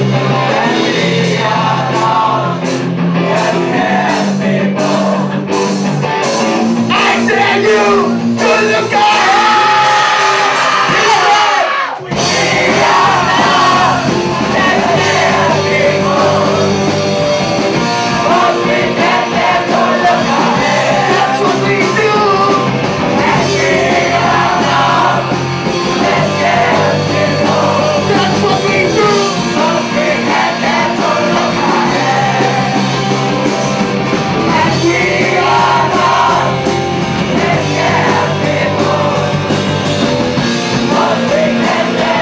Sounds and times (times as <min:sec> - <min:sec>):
Vocal music: 0:00.0 - 0:42.2
Singing: 0:06.9 - 0:17.0, 0:18.1 - 0:33.1, 0:34.5 - 0:36.7, 0:37.3 - 0:39.6, 0:40.8 - 0:42.2.